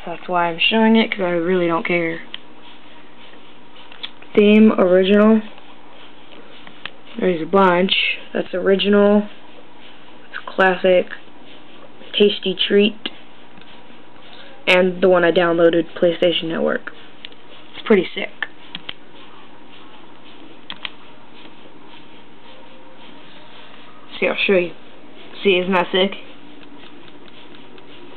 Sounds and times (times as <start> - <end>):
Speech: 0.0 - 2.3, 4.3 - 5.6, 7.2 - 9.4, 10.3 - 11.2, 12.1 - 13.2, 14.3 - 17.0, 17.8 - 18.6, 23.3 - 26.3.